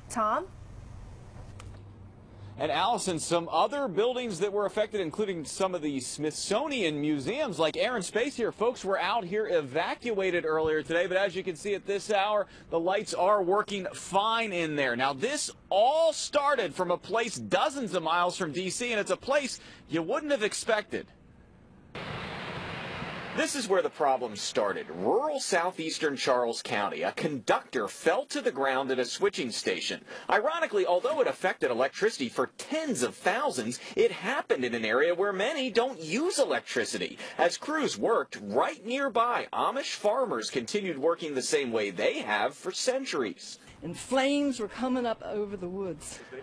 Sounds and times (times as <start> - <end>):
Speech: 2.6 - 21.1, 23.4 - 46.4.